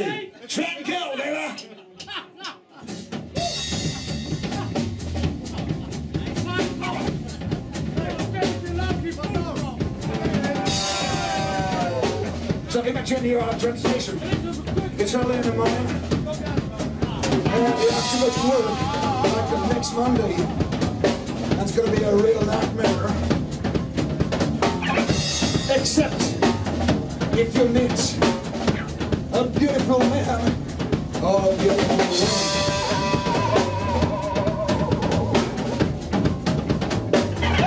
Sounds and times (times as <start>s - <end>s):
Speech: 0.0s - 1.8s, 6.1s - 7.2s, 8.0s - 10.8s, 12.7s - 20.5s, 21.5s - 23.3s, 25.7s - 26.4s, 27.4s - 28.3s, 29.3s - 30.6s, 31.2s - 32.5s
Blues: 1.9s - 37.6s.